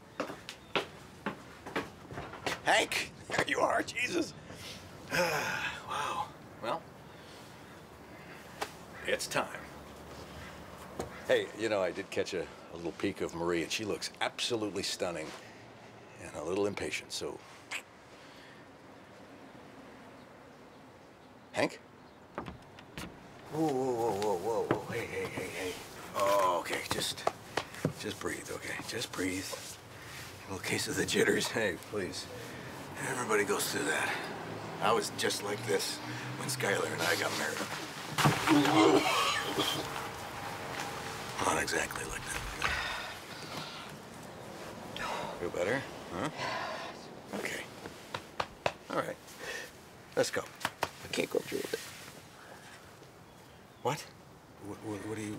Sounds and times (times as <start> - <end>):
Speech: 30.5 - 32.3, 33.0 - 37.7, 41.4 - 42.5, 53.8 - 55.3.